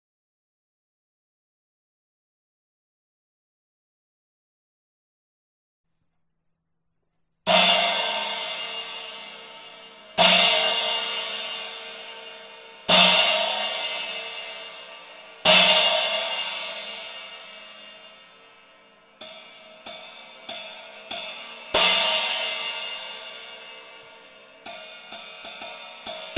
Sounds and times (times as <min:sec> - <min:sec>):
Cymbal: 0:07.5 - 0:26.3.